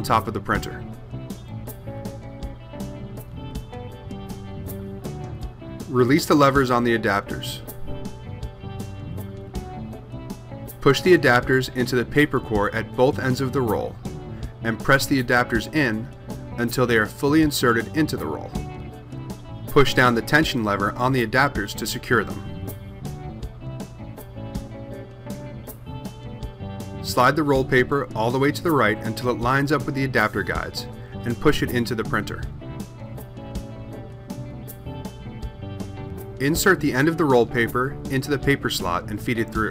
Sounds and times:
Speech: 0.0s - 0.9s, 5.9s - 7.7s, 10.8s - 14.0s, 14.6s - 18.6s, 19.7s - 22.5s, 27.0s - 32.5s, 36.4s - 39.7s
Music: 0.0s - 39.7s.

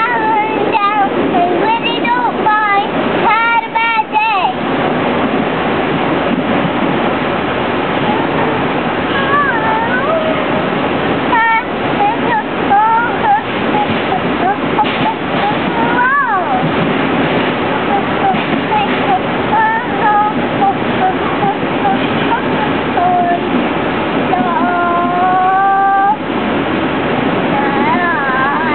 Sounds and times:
Child singing: 0.0s - 4.6s, 9.1s - 10.6s, 11.3s - 16.8s, 17.6s - 23.6s, 24.2s - 26.2s, 27.5s - 28.7s.

